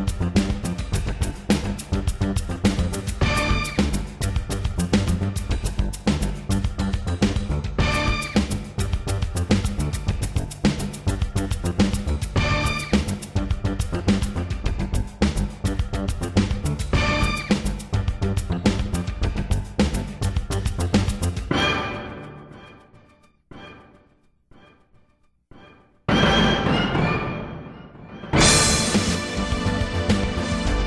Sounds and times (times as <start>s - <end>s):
Music: 0.0s - 30.8s.